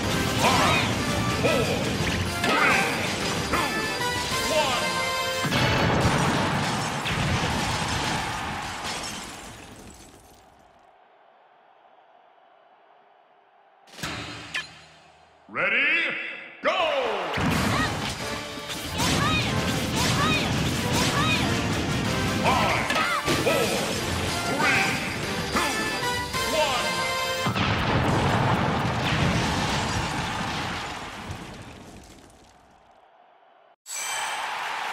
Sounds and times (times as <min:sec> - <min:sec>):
Smash, crash: 0:00.0 - 0:04.6, 0:05.4 - 0:10.4, 0:17.4 - 0:25.3, 0:27.4 - 0:32.5
Music: 0:00.0 - 0:06.0, 0:17.5 - 0:27.6
Speech: 0:15.5 - 0:17.9, 0:22.4 - 0:23.9, 0:26.5 - 0:26.9.